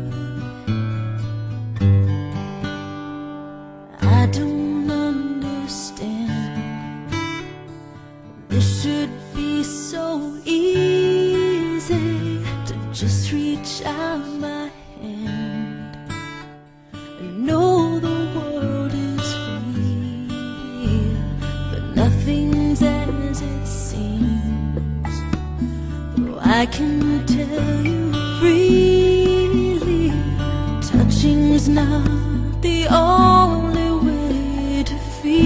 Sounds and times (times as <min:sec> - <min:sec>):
Music: 0:00.0 - 0:35.4.